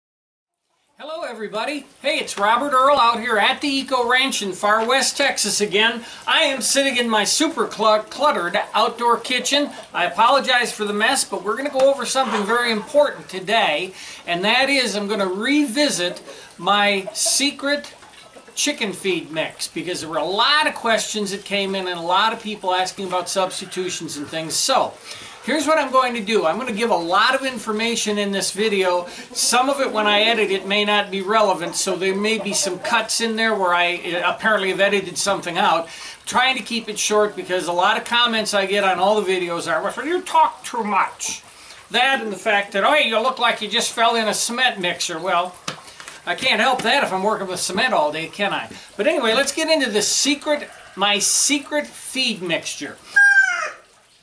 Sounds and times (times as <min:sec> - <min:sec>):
Speech: 0:01.0 - 0:18.0, 0:18.6 - 0:45.6, 0:46.3 - 0:53.0
Cluck: 0:12.2 - 0:13.0, 0:17.0 - 0:17.4, 0:31.6 - 0:33.1.